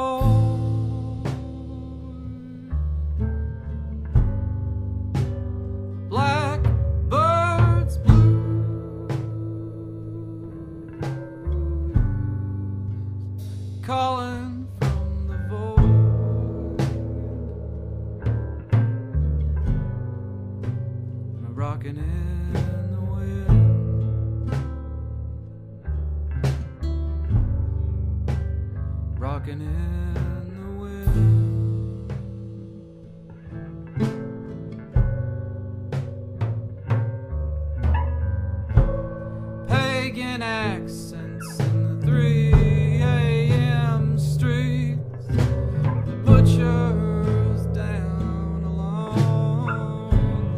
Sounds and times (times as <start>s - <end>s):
Music: 0.0s - 50.5s.